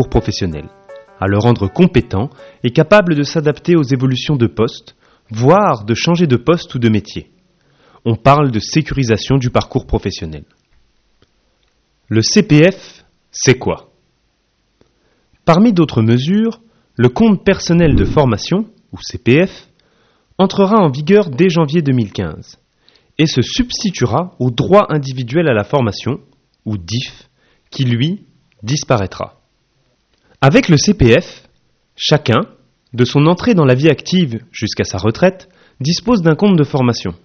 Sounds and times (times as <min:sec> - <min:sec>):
Speech: 0:00.0 - 0:07.3, 0:08.0 - 0:10.6, 0:12.1 - 0:14.0, 0:15.4 - 0:19.7, 0:20.4 - 0:22.6, 0:23.2 - 0:29.4, 0:30.4 - 0:37.2.